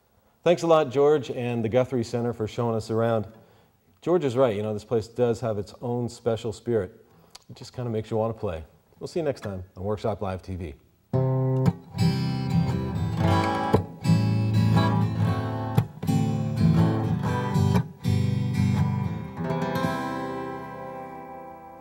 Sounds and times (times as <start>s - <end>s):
Acoustic guitar: 11.1s - 21.8s.